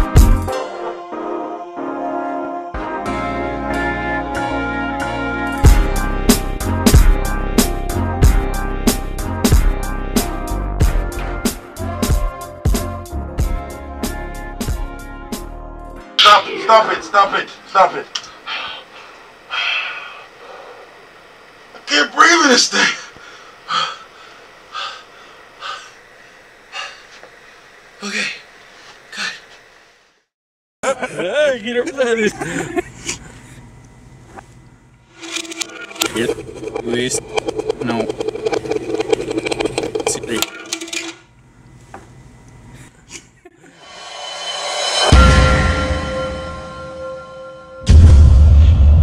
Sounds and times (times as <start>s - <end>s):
Speech: 16.2s - 18.2s, 21.8s - 23.1s, 30.9s - 32.5s.